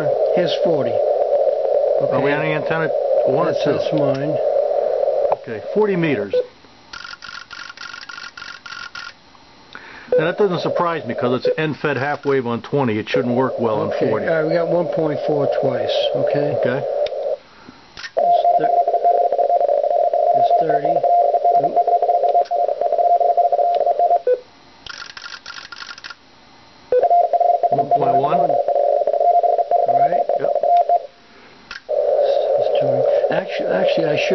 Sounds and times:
Speech: 0.0 - 1.0, 2.0 - 4.4, 5.4 - 6.5, 10.2 - 16.9, 18.3 - 18.8, 20.4 - 21.0, 27.7 - 28.6, 32.3 - 34.3
Radio: 0.0 - 6.5, 10.1 - 17.4, 18.2 - 18.9, 20.2 - 22.4, 27.7 - 28.6, 31.9 - 34.3.

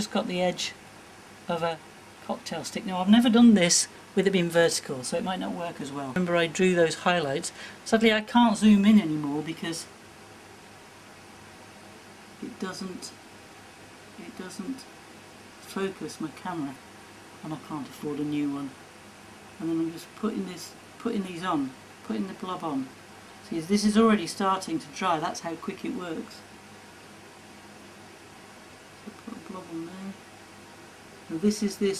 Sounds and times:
Speech: 0.0 - 0.8, 1.5 - 9.9, 12.4 - 13.2, 14.2 - 14.9, 15.6 - 16.8, 17.4 - 18.8, 19.6 - 26.5, 29.1 - 30.2, 31.3 - 31.9.

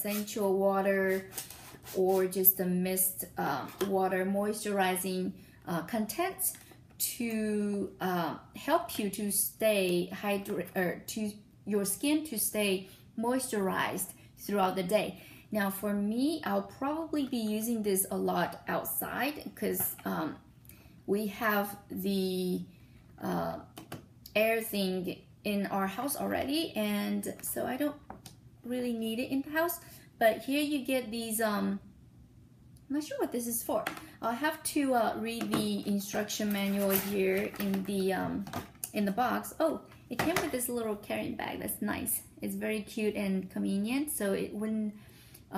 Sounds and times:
Speech: 0.0 - 1.3, 1.9 - 20.4, 21.1 - 23.7, 24.3 - 28.0, 28.6 - 31.8, 32.9 - 45.5.

